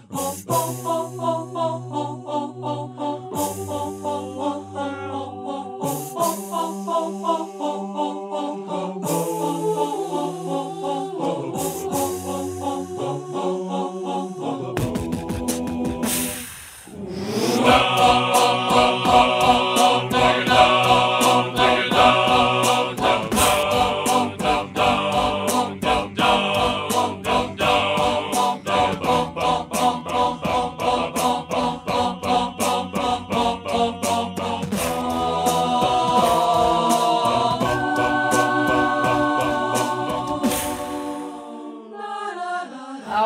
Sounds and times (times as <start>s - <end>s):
Music: 0.0s - 43.2s.